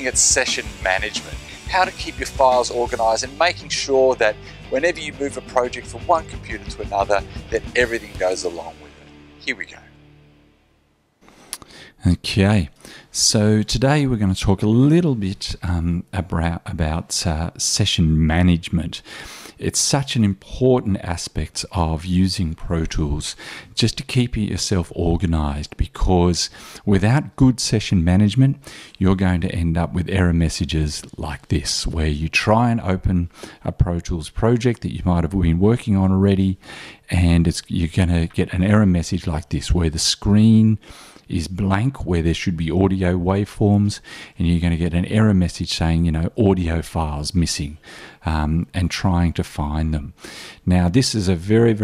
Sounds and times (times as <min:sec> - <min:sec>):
Speech: 0:00.0 - 0:09.9, 0:12.0 - 0:51.8.